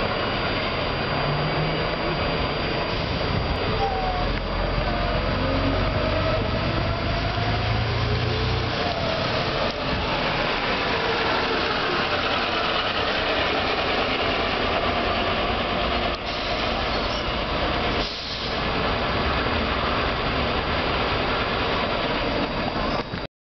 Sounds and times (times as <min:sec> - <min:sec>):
Bus: 0:00.0 - 0:23.3.